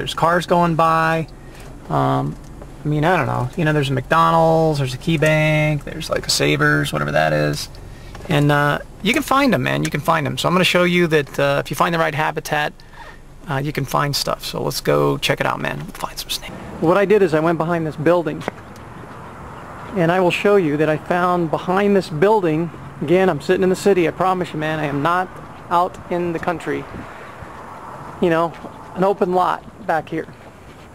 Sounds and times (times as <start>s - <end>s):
Speech: 0.0s - 1.3s, 1.9s - 7.7s, 8.3s - 12.8s, 13.4s - 18.6s, 19.9s - 26.9s, 28.2s - 30.4s.